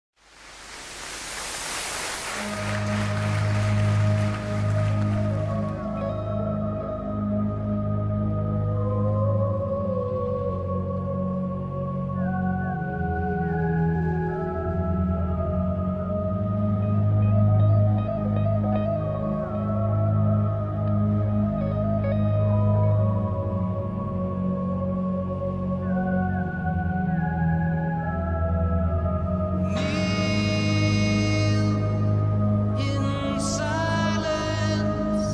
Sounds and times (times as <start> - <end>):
Music: 2.4 - 35.3.